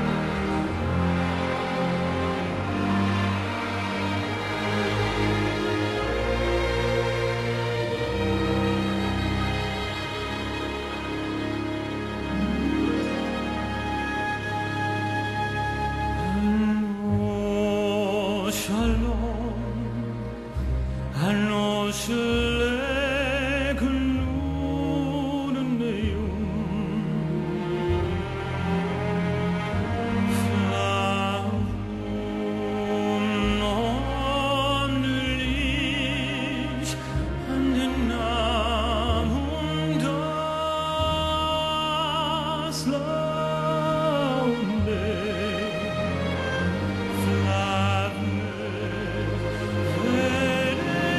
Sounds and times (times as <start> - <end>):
Music: 0.0 - 51.1
Male singing: 16.2 - 20.1, 21.1 - 27.8, 30.2 - 51.1.